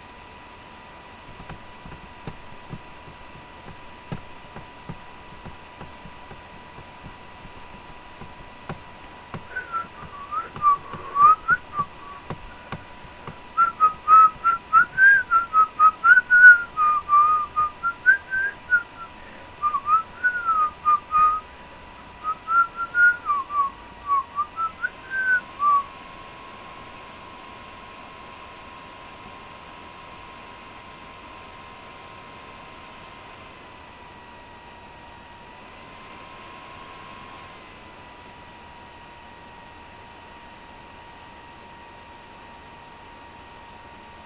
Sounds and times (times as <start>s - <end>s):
Whistling: 9.4s - 12.4s, 13.6s - 21.4s, 22.2s - 25.9s.